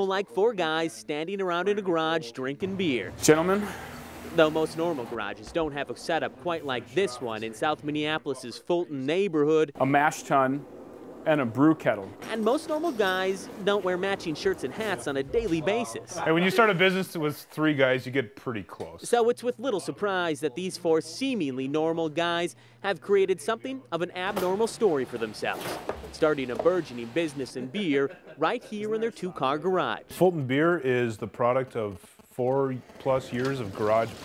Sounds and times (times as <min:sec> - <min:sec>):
Speech: 0:04.3 - 0:10.6, 0:11.3 - 0:34.2.